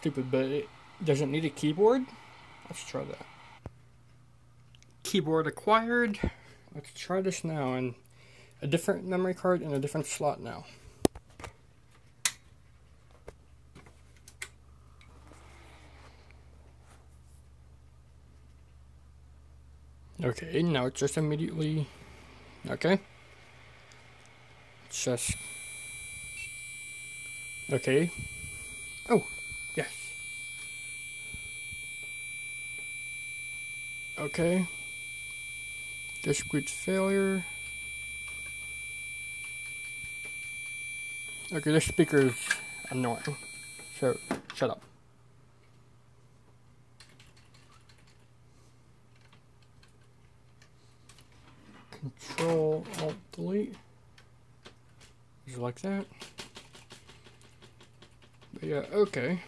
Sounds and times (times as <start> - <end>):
Speech: 0.0 - 3.3, 5.0 - 8.0, 8.6 - 10.8, 20.2 - 21.9, 22.7 - 23.1, 24.9 - 25.4, 27.7 - 28.2, 34.2 - 34.7, 36.2 - 37.5, 41.5 - 43.4, 44.0 - 44.9, 52.0 - 53.9, 55.5 - 56.1, 58.6 - 59.4.